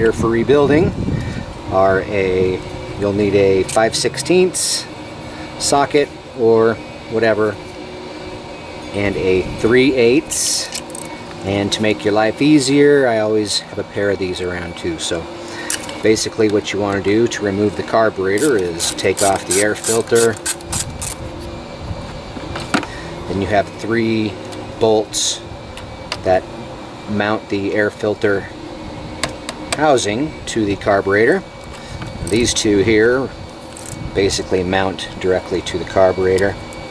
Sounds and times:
Speech: 0:00.0 - 0:01.0, 0:01.7 - 0:04.9, 0:05.6 - 0:07.6, 0:08.9 - 0:10.8, 0:11.4 - 0:15.3, 0:16.0 - 0:20.4, 0:23.3 - 0:25.4, 0:26.2 - 0:26.4, 0:27.1 - 0:28.6, 0:29.8 - 0:31.5, 0:32.2 - 0:33.3, 0:34.1 - 0:36.6
Vacuum cleaner: 0:00.2 - 0:36.9.

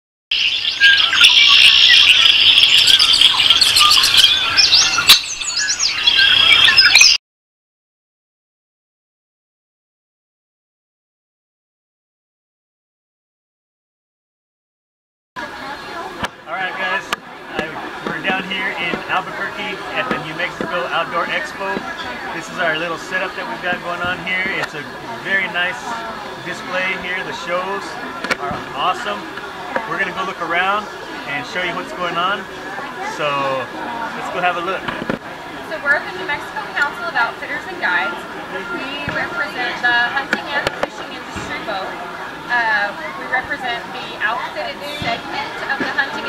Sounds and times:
Chirp, tweet: 0:00.3 - 0:07.2.

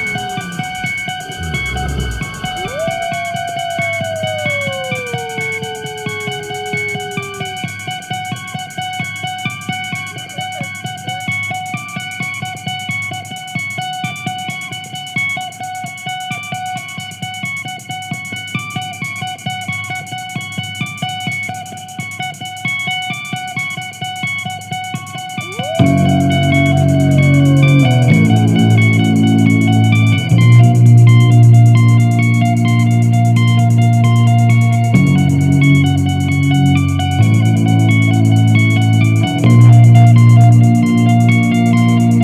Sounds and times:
Strum: 0:00.0 - 0:08.0, 0:25.4 - 0:31.9.

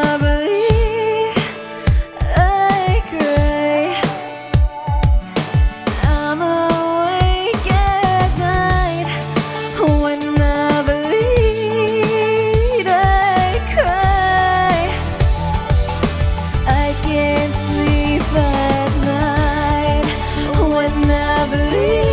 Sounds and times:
Music of Asia: 0:00.0 - 0:22.1
Singing: 0:16.7 - 0:22.1.

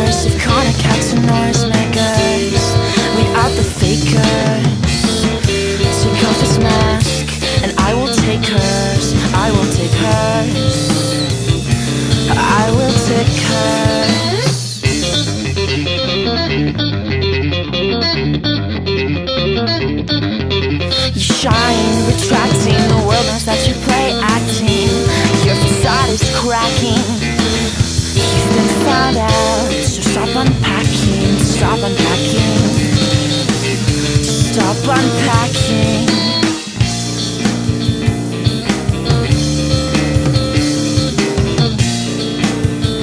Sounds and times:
Music: 0:00.0 - 0:43.0.

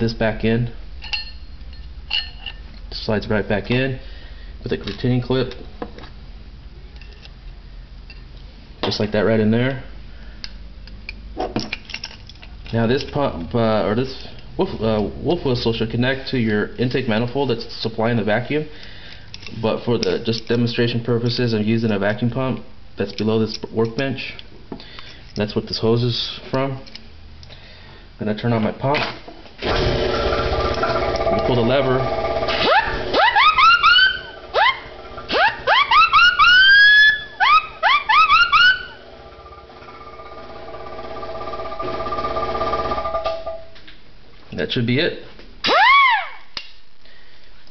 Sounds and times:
Speech: 0:00.0 - 0:00.8, 0:02.9 - 0:04.0, 0:04.6 - 0:05.6, 0:08.8 - 0:09.9, 0:12.7 - 0:18.7, 0:19.5 - 0:24.4, 0:25.4 - 0:26.9, 0:28.2 - 0:29.2, 0:31.3 - 0:32.1, 0:44.5 - 0:45.3.

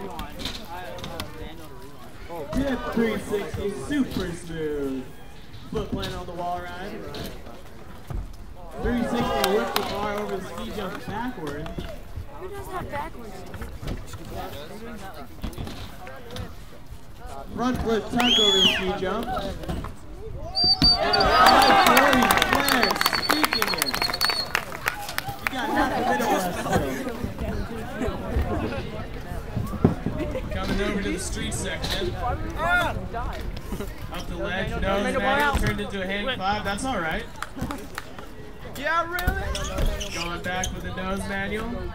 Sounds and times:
Speech: 0:08.6 - 0:20.3.

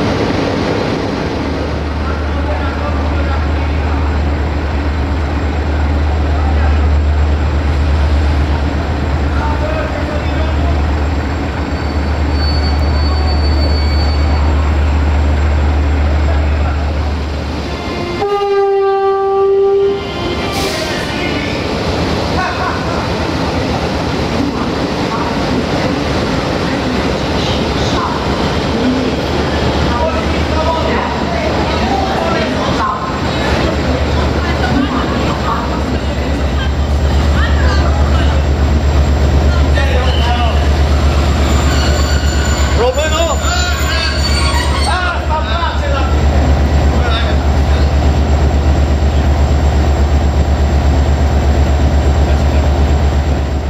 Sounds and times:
Railroad car, train wagon: 0:00.0 - 0:53.6
Train horn: 0:17.7 - 0:20.7.

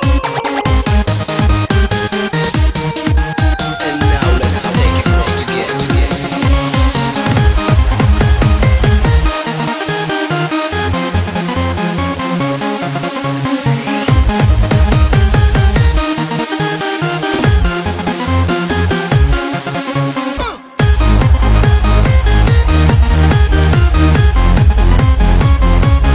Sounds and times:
Techno: 0:00.0 - 0:09.8, 0:20.2 - 0:26.1
Trance music: 0:00.0 - 0:16.6, 0:17.2 - 0:26.1
Electronic dance music: 0:02.5 - 0:09.6, 0:17.3 - 0:18.4, 0:20.4 - 0:26.1
Electronica: 0:03.2 - 0:09.4
Dubstep: 0:03.8 - 0:09.3.

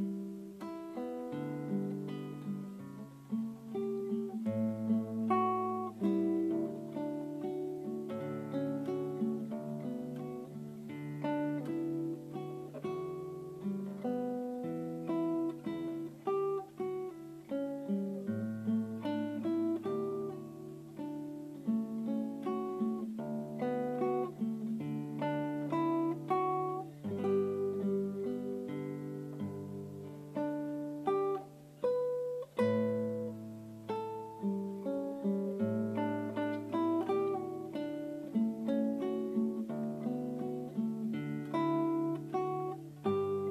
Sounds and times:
Acoustic guitar: 0:00.0 - 0:43.5.

